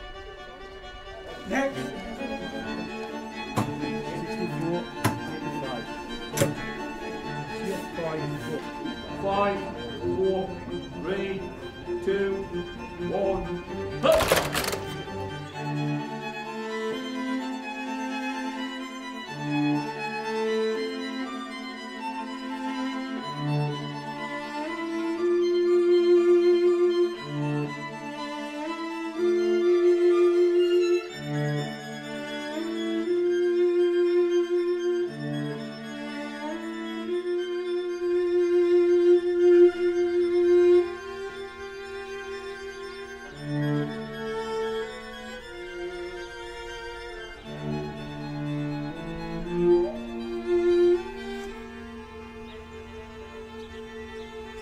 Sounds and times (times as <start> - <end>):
Cello: 0.0 - 54.6
Violin, fiddle: 0.0 - 54.6.